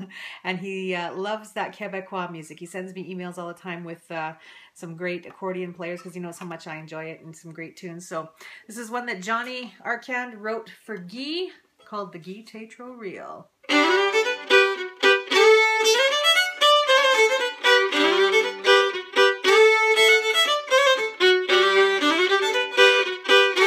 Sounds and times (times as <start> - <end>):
Violin, fiddle: 13.7 - 23.6.